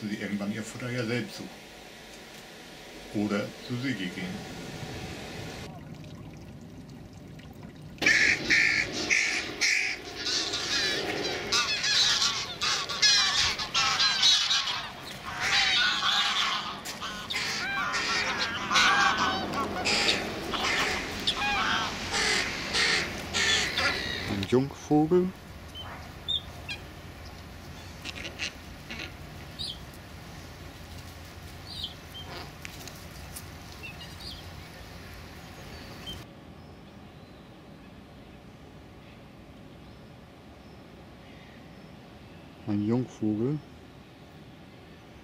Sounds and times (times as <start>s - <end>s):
Speech: 0.0s - 1.6s, 3.1s - 4.4s, 24.3s - 25.4s, 42.6s - 43.7s
Crow: 8.0s - 24.4s.